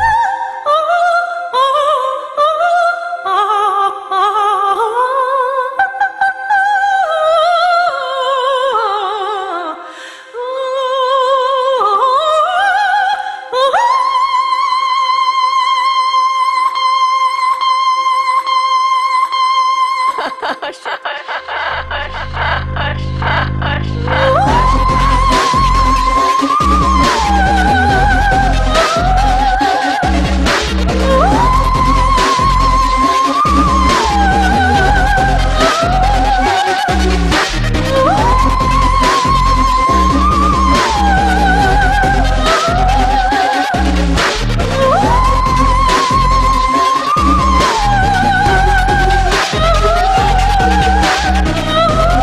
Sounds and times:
Music: 0.0 - 52.2.

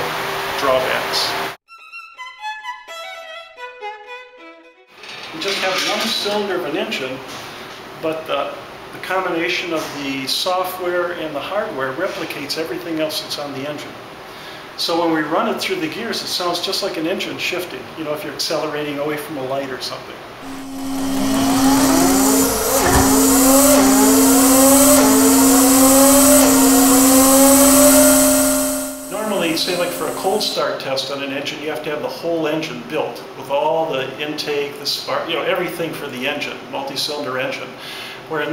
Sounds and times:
Speech: 0.6 - 1.4, 5.3 - 7.3, 8.0 - 14.0, 14.8 - 20.2, 29.1 - 38.5.

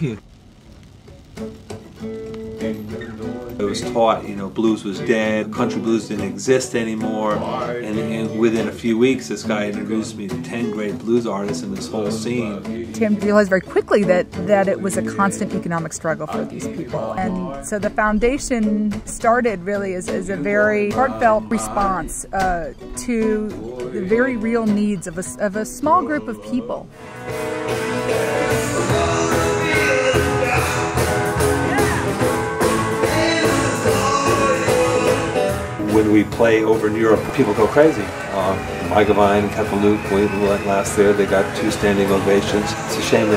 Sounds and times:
Speech: 0.0 - 0.2, 3.6 - 26.9, 35.8 - 43.3
Music: 0.8 - 43.3.

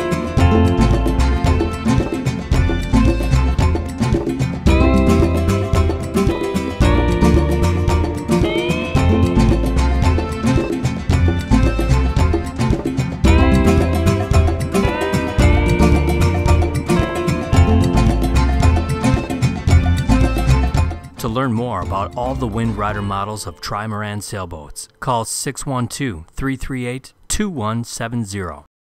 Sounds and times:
Music: 0.0 - 25.1
Speech: 21.2 - 28.7.

